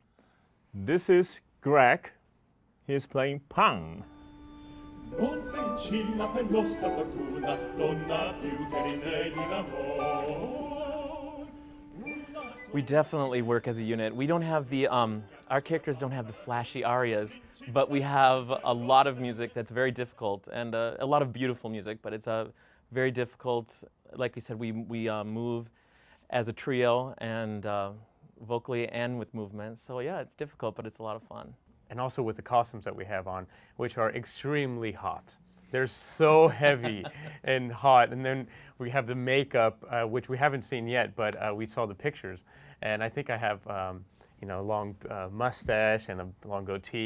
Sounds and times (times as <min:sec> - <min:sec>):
Speech: 0:00.7 - 0:02.2, 0:02.8 - 0:04.1, 0:12.7 - 0:25.7, 0:26.3 - 0:47.0.